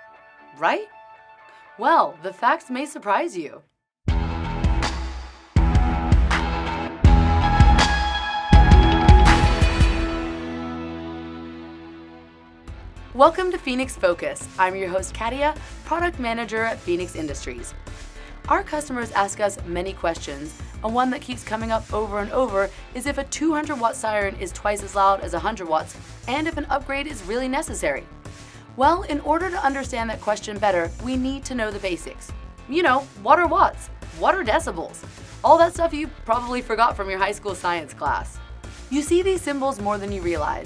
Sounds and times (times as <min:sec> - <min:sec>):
Music: 0:00.0 - 0:40.6
Speech: 0:00.6 - 0:00.9, 0:01.8 - 0:03.6, 0:13.2 - 0:17.7, 0:18.5 - 0:28.0, 0:28.8 - 0:40.6.